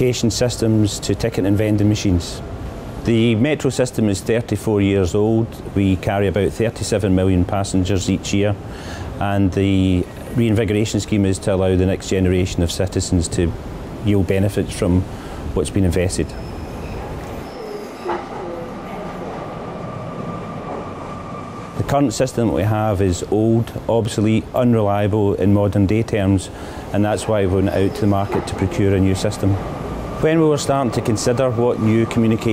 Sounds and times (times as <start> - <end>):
Speech: 0.0 - 2.4, 3.0 - 8.6, 9.2 - 13.5, 14.1 - 15.0, 15.6 - 16.4, 21.8 - 29.6, 30.2 - 32.5.